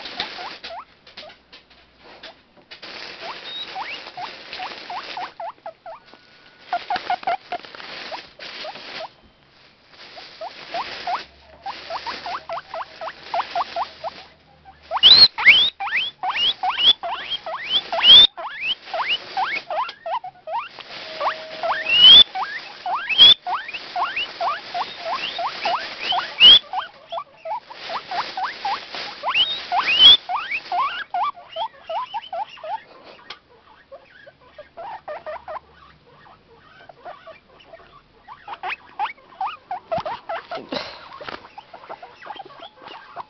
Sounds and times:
Rodents, rats, mice: 3.0s - 6.1s, 6.7s - 9.1s, 10.4s - 43.2s.

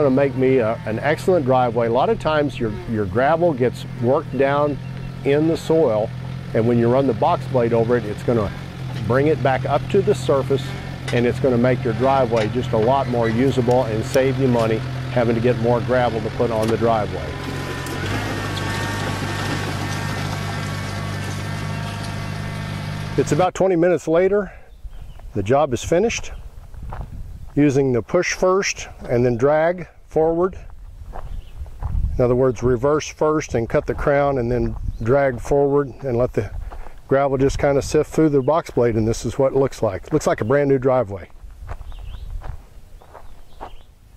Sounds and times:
Speech: 0.0s - 17.4s, 23.2s - 24.6s, 25.4s - 26.4s, 27.6s - 30.7s, 32.2s - 41.3s
Outside, rural or natural: 0.0s - 44.1s.

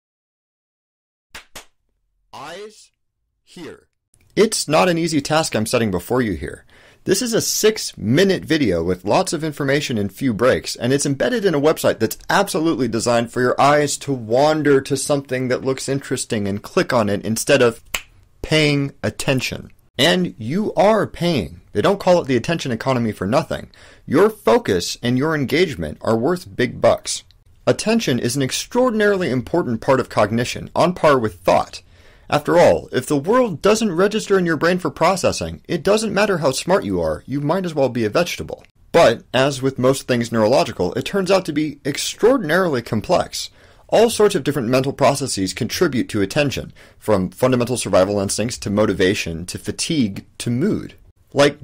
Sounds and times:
Speech: 2.4s - 17.8s, 18.4s - 51.6s.

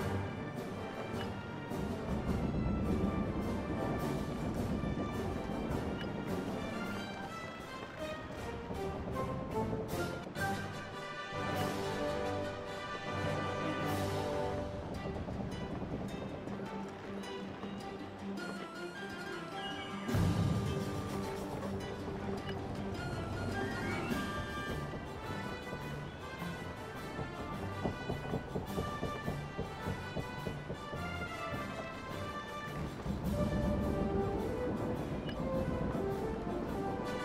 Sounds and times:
Music: 0.0s - 37.2s.

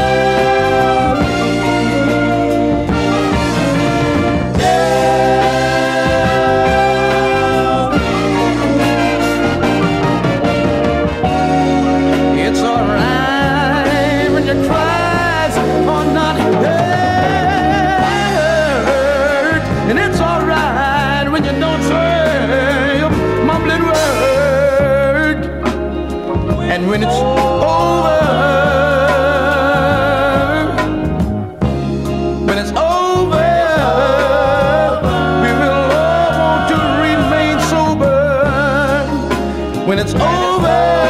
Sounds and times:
Gospel music: 0.0s - 41.1s.

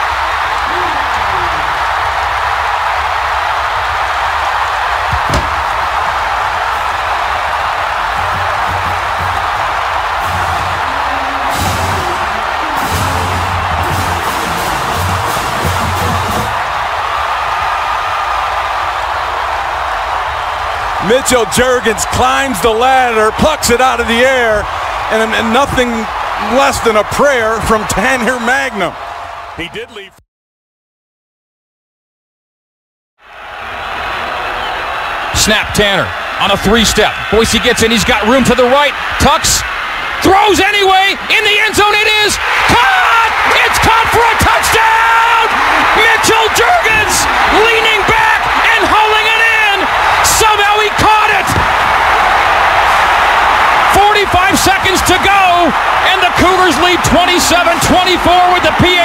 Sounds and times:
Music: 8.2s - 16.6s
Speech: 21.0s - 29.0s, 29.6s - 30.2s, 35.4s - 51.6s, 53.9s - 59.0s.

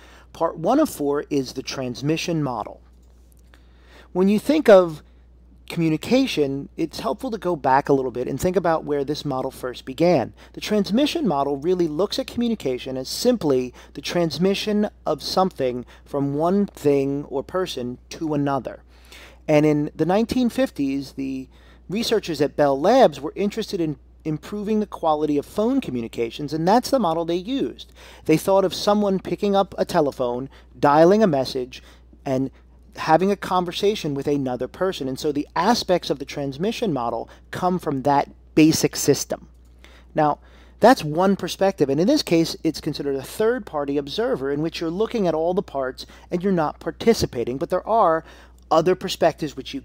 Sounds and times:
Speech: 0.3s - 2.8s, 4.1s - 5.0s, 5.7s - 18.8s, 19.5s - 39.5s, 40.2s - 49.8s.

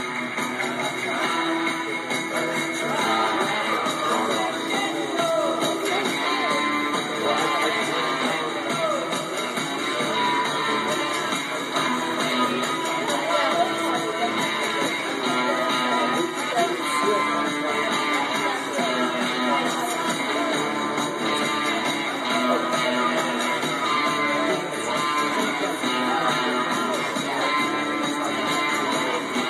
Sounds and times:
Acoustic guitar: 0.0s - 29.4s.

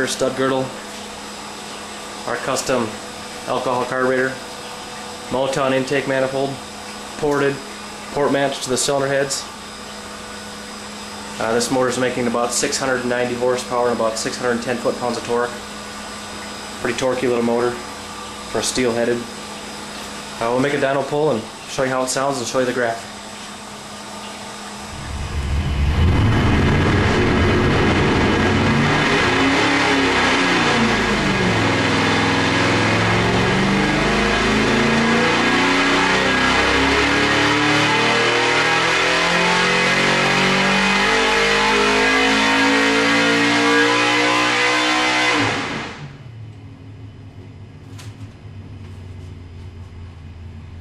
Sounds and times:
Speech: 0.0s - 0.8s, 2.3s - 4.4s, 5.3s - 6.6s, 7.2s - 9.5s, 11.4s - 15.6s, 16.8s - 17.8s, 18.5s - 19.3s, 20.4s - 23.1s.

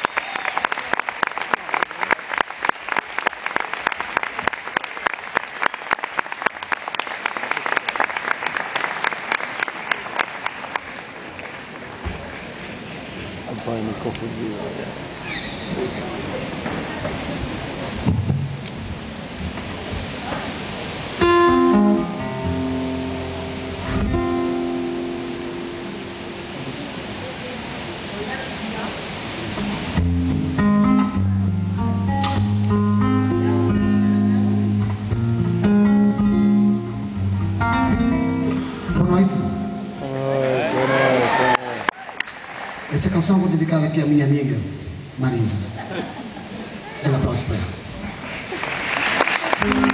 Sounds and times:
Music: 21.2s - 26.6s, 30.0s - 40.0s, 49.6s - 49.9s.

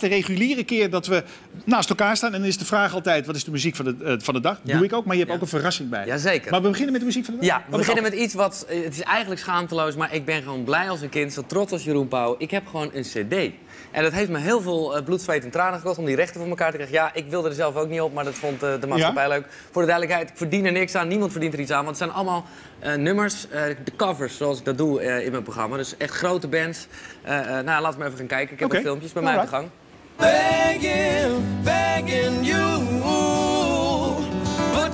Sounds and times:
Speech: 0.0s - 29.8s
Music: 30.2s - 34.9s.

